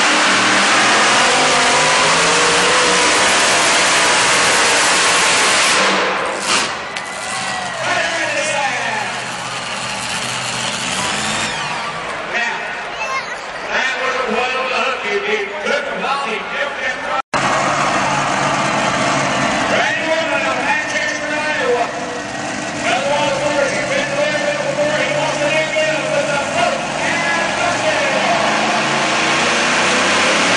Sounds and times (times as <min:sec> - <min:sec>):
Truck: 0:00.0 - 0:30.5
Speech: 0:07.8 - 0:09.2, 0:12.3 - 0:17.2, 0:19.7 - 0:22.0, 0:22.8 - 0:28.4.